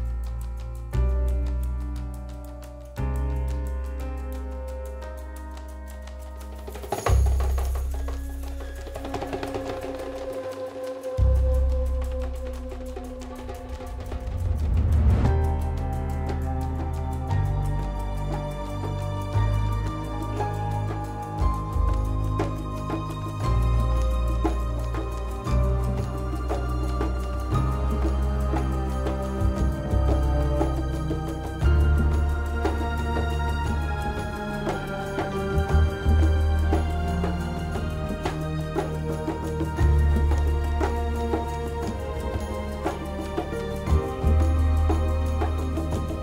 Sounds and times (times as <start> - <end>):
Percussion: 0.0 - 46.2.